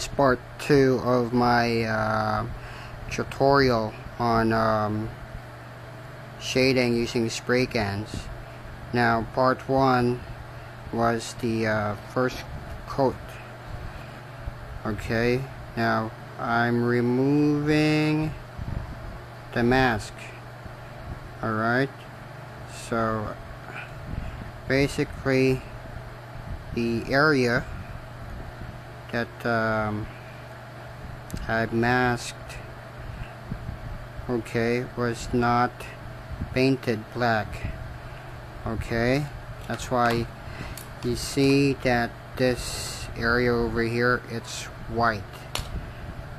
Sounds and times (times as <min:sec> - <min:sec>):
Speech: 0:00.0 - 0:05.2, 0:06.4 - 0:08.3, 0:08.9 - 0:10.2, 0:10.9 - 0:13.4, 0:14.8 - 0:18.4, 0:19.5 - 0:20.4, 0:21.4 - 0:22.0, 0:22.7 - 0:23.4, 0:24.7 - 0:25.7, 0:26.8 - 0:27.7, 0:29.1 - 0:30.1, 0:31.3 - 0:32.7, 0:34.2 - 0:37.8, 0:38.6 - 0:40.3, 0:41.0 - 0:45.5.